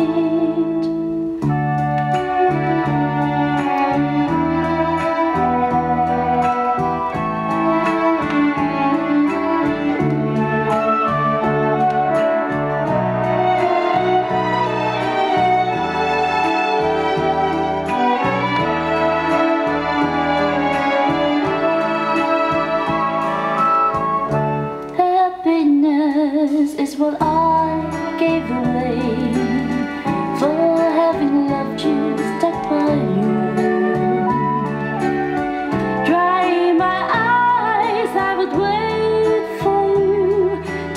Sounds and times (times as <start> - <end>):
Music: 0.0 - 40.9.